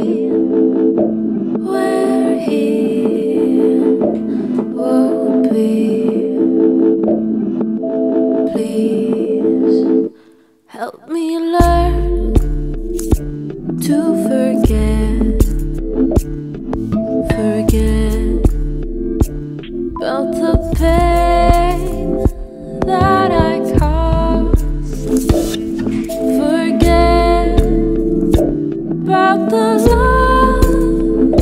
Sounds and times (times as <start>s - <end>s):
Sad music: 11.9s - 31.4s.